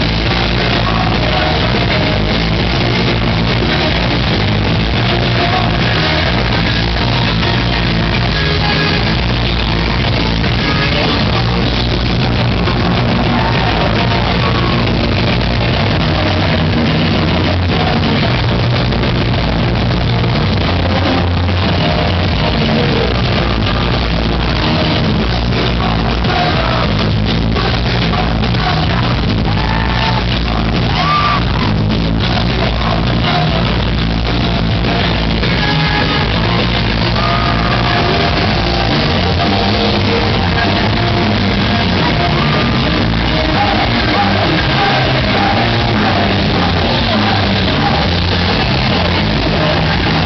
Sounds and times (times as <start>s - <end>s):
Music: 0.0s - 50.2s.